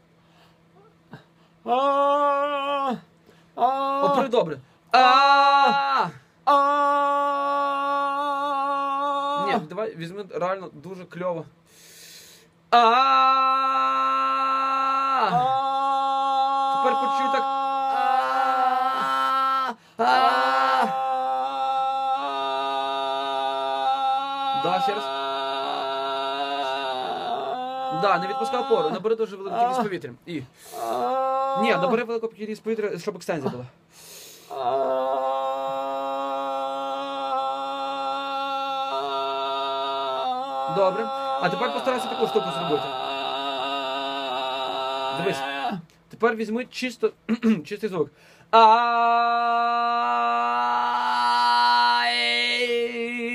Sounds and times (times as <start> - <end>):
Speech: 3.8 - 4.6, 9.4 - 11.5, 16.7 - 17.5, 27.9 - 30.5, 31.6 - 33.8, 40.7 - 42.9, 46.1 - 48.1.